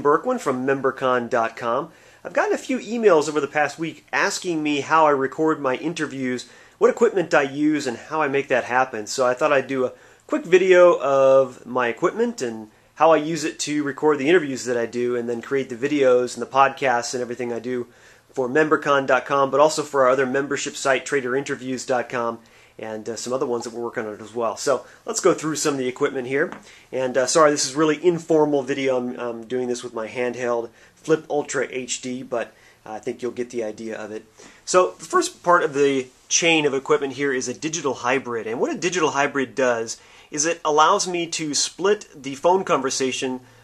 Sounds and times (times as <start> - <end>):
Speech: 0.0 - 43.5.